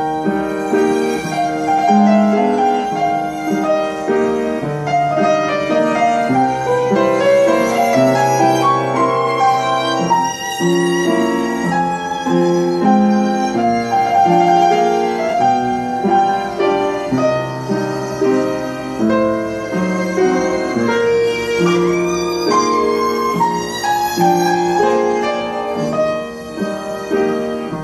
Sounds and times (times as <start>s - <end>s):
Musical instrument: 0.0s - 27.8s.